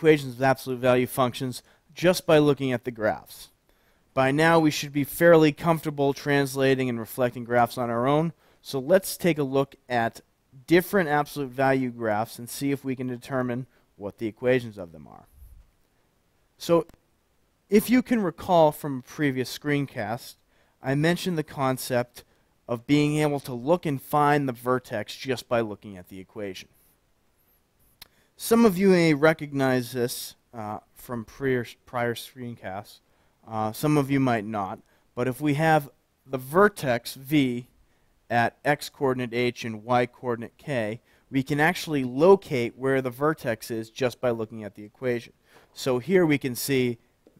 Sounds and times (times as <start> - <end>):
Speech: 0.0 - 3.6, 4.2 - 15.3, 16.6 - 17.0, 17.7 - 26.7, 28.4 - 37.7, 38.3 - 47.3.